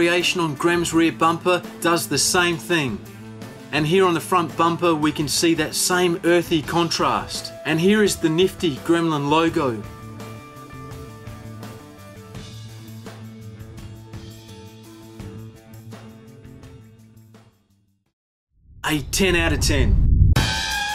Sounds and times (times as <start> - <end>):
Speech: 0.0 - 3.0, 3.7 - 9.9, 18.9 - 20.0.